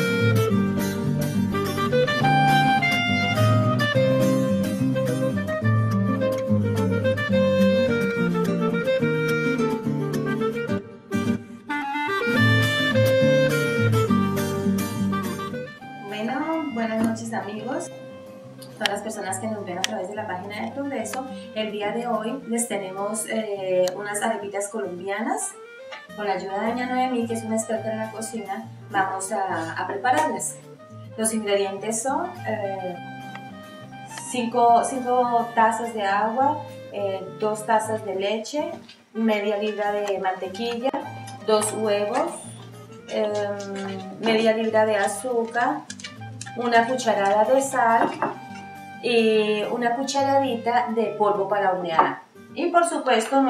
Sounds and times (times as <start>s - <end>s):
Music: 0.0s - 53.5s
Speech: 16.0s - 17.9s, 18.8s - 25.6s, 26.2s - 30.6s, 31.2s - 33.0s, 34.2s - 45.8s, 46.6s - 48.1s, 49.0s - 53.5s.